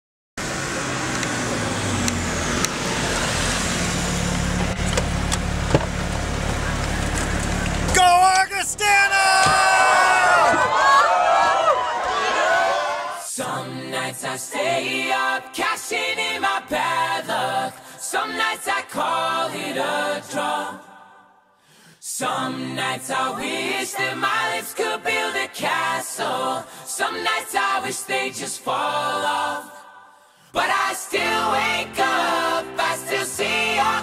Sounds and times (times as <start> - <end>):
Outside, urban or manmade: 0.4 - 12.9
Speech: 7.9 - 10.3.